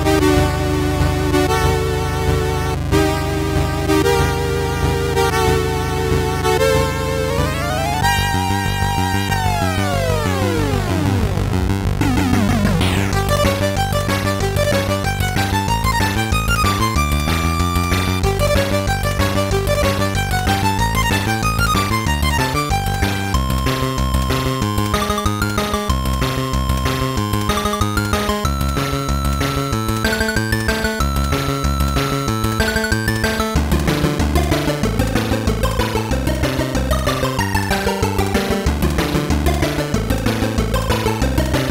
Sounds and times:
Music: 0.0 - 41.7.

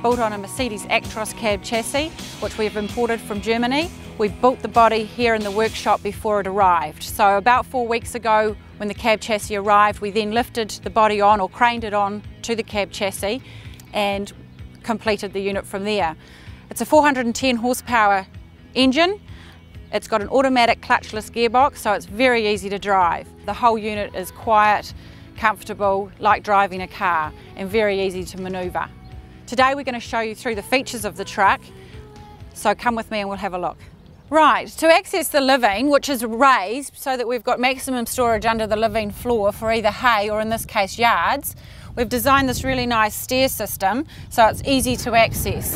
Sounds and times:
Speech: 0.0 - 19.2, 19.9 - 28.9, 29.5 - 31.7, 32.6 - 45.7.

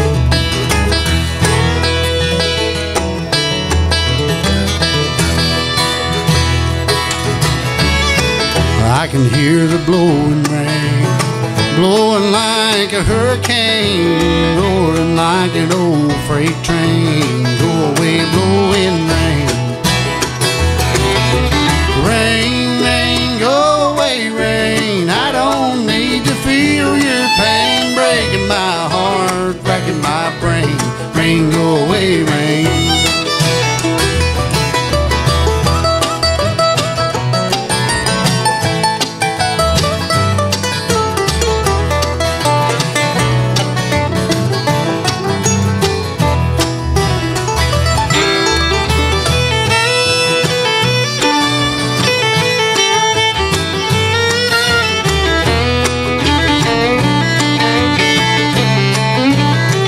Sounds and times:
Guitar: 0.0 - 59.8.

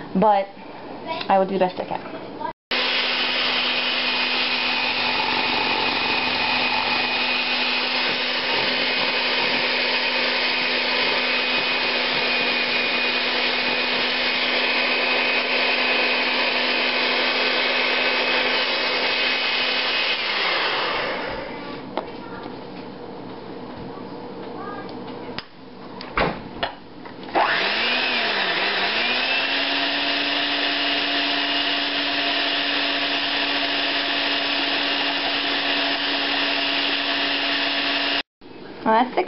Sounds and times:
Blender: 2.7 - 21.8, 27.3 - 38.3.

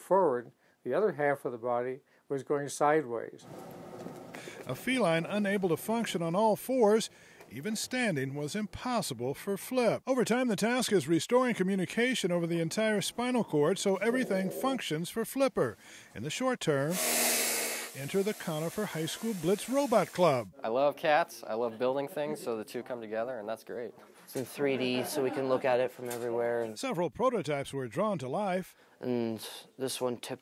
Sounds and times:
Speech: 0.0 - 3.4, 4.7 - 17.0, 18.0 - 30.4.

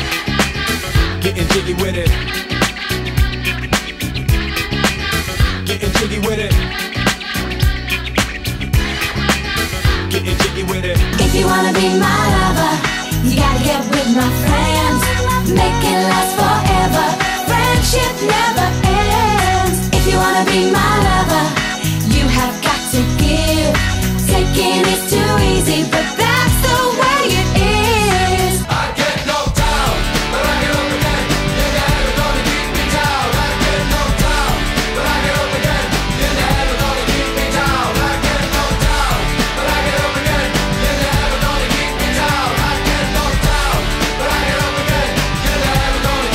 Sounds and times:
Music: 0.0 - 46.3.

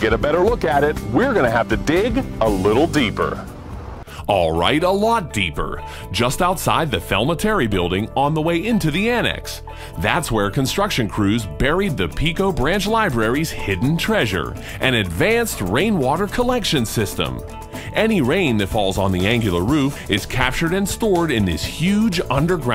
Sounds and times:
Speech: 0.0 - 3.4, 4.2 - 22.7
Music: 0.0 - 22.7.

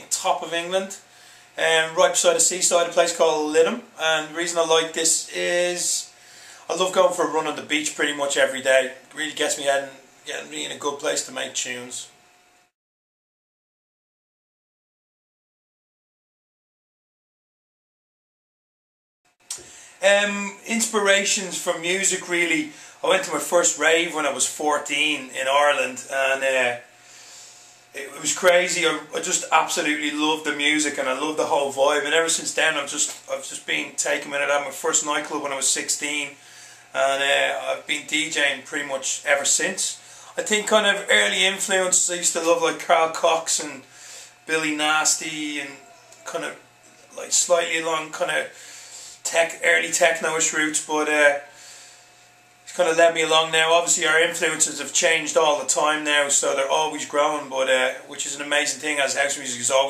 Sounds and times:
Speech: 0.0 - 12.2, 19.5 - 26.9, 28.0 - 48.6, 49.2 - 51.5, 52.7 - 59.9.

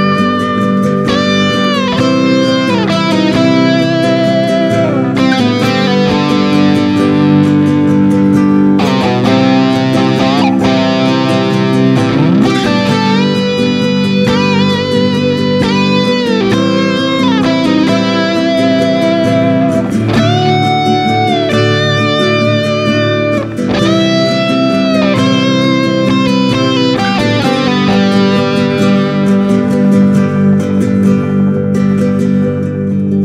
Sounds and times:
Steel guitar, slide guitar: 0.0 - 33.2.

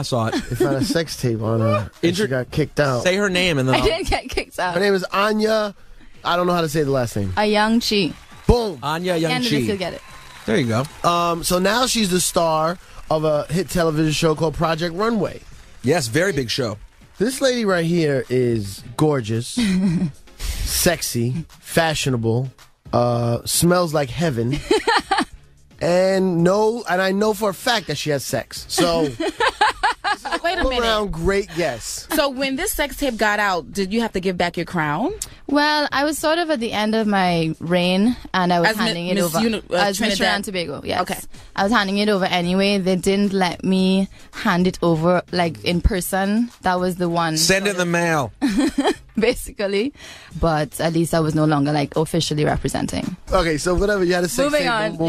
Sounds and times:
Speech: 0.0 - 5.6, 8.5 - 19.5, 20.9 - 24.6, 25.8 - 29.2, 30.2 - 32.8, 36.6 - 41.8, 46.8 - 48.3, 51.7 - 55.0
Music: 0.0 - 55.0.

